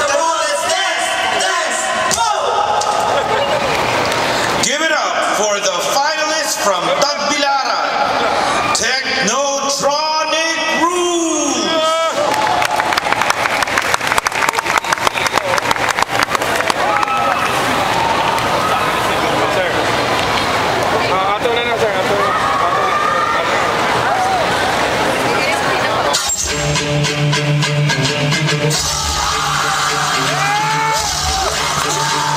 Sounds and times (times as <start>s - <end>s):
Music: 26.1s - 32.3s.